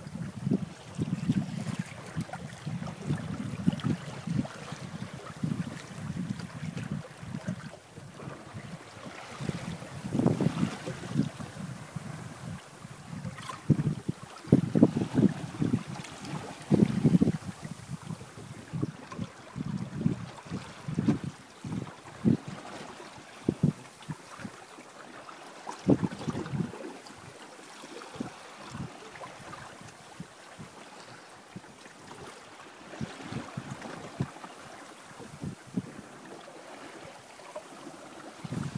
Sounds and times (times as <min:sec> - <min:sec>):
Wind noise (microphone): 0:00.0 - 0:24.6, 0:25.8 - 0:27.3, 0:28.1 - 0:34.5, 0:35.2 - 0:36.1, 0:38.4 - 0:38.7
Boat, Water vehicle: 0:00.0 - 0:38.7
Waves, surf: 0:00.0 - 0:38.7.